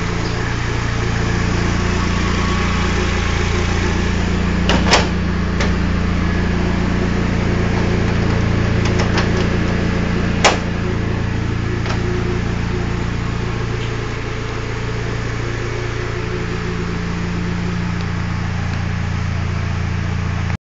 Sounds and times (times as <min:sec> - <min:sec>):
Car: 0:00.0 - 0:20.6
Idling: 0:00.0 - 0:20.6.